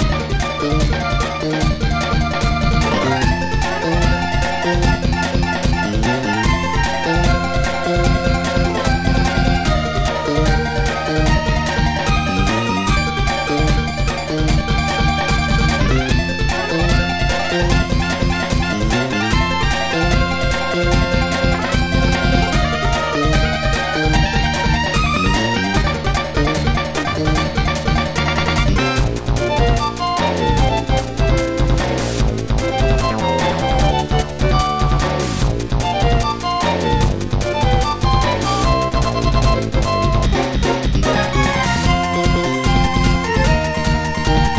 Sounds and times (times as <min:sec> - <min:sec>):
Soundtrack music: 0:00.0 - 0:44.5.